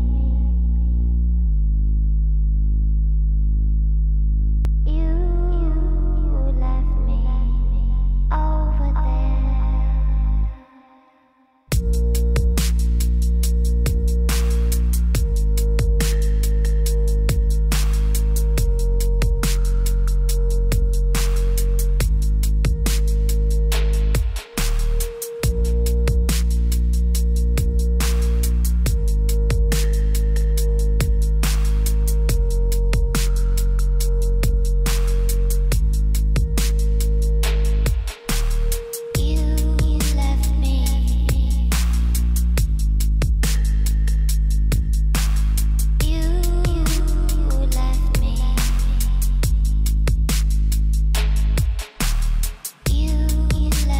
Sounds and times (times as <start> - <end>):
Dubstep: 11.7 - 53.9.